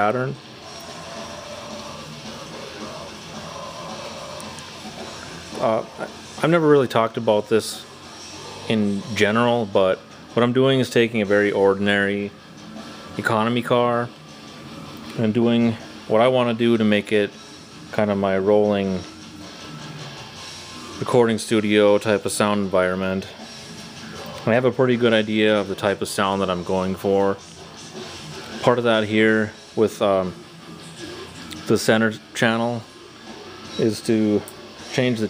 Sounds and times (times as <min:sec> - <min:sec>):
Speech: 0:00.0 - 0:00.4, 0:05.6 - 0:07.9, 0:08.7 - 0:12.3, 0:13.2 - 0:14.1, 0:15.2 - 0:17.3, 0:17.9 - 0:19.0, 0:21.0 - 0:23.4, 0:24.4 - 0:27.4, 0:28.6 - 0:30.4, 0:31.6 - 0:32.9, 0:33.8 - 0:35.2
Music: 0:00.0 - 0:35.2.